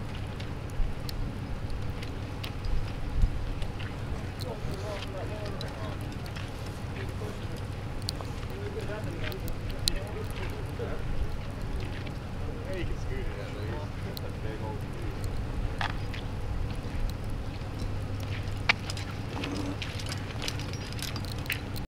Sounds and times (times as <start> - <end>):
Speech: 4.0 - 7.7, 8.4 - 15.4.